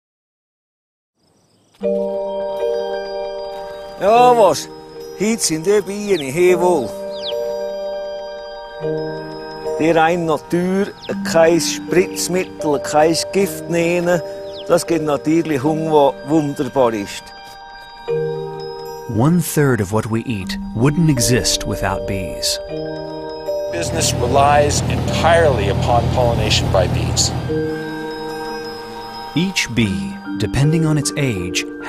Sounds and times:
Glockenspiel: 1.8s - 31.8s
Marimba, xylophone: 1.8s - 31.8s.

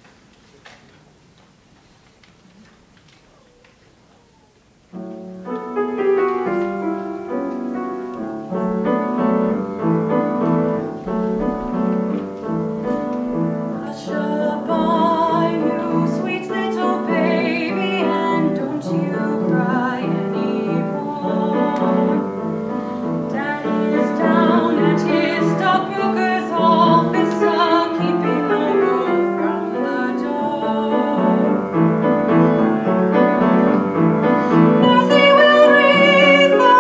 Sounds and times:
Music: 5.0s - 36.8s.

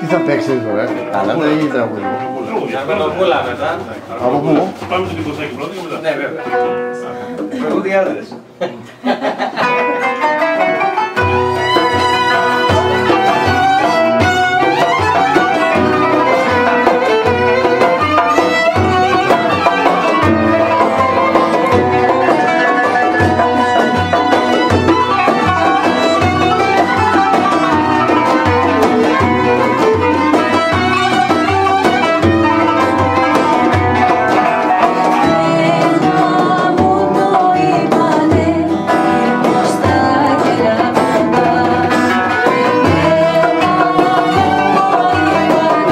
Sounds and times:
Folk music: 0.0s - 45.9s.

